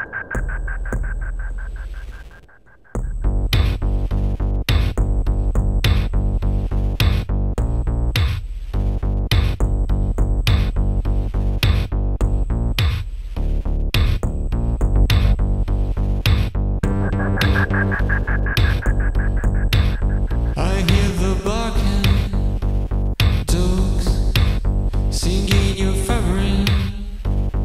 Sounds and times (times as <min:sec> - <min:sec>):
Music: 0:03.0 - 0:27.6.